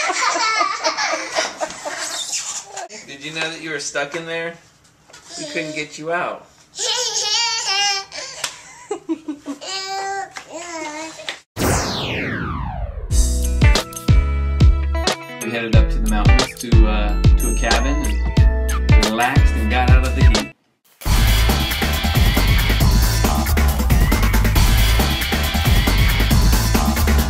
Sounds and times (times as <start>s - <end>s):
Babbling: 5.2s - 5.9s, 6.8s - 8.2s, 9.6s - 11.3s.